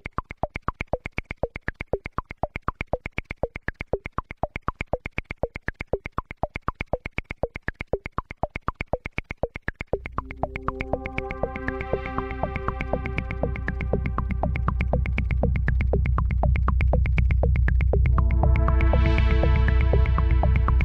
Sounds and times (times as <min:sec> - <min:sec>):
Electronic music: 0:10.0 - 0:20.8.